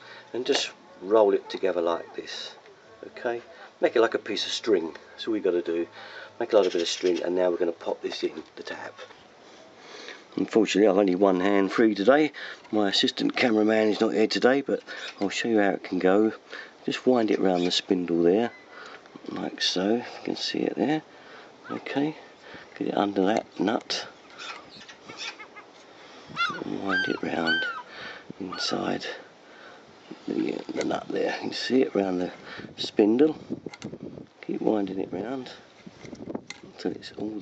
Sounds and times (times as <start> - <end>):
Outside, rural or natural: 0.0 - 37.4
Speech: 0.3 - 9.0, 10.4 - 18.5, 19.3 - 21.0, 21.7 - 22.2, 22.8 - 24.1, 26.6 - 27.6, 28.4 - 29.2, 30.3 - 33.4, 34.4 - 35.6, 36.8 - 37.4.